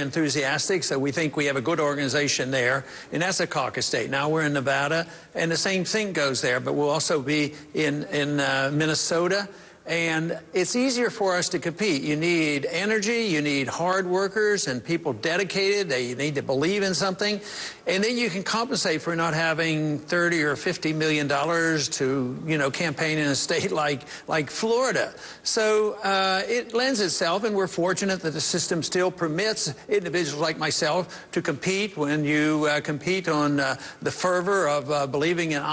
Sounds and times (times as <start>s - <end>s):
Male speech, man speaking: 0.0s - 35.7s
Narration, monologue: 0.0s - 35.7s.